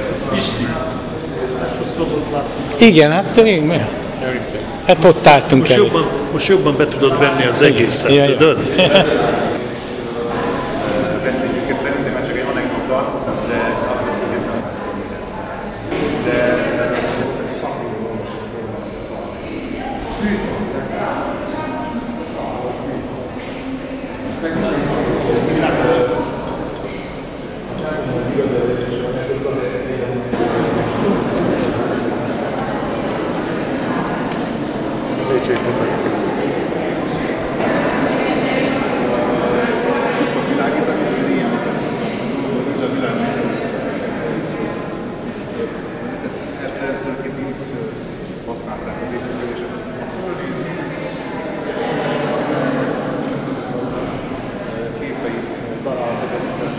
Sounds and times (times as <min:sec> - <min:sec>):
Speech: 0:00.0 - 0:27.1, 0:27.7 - 0:56.7.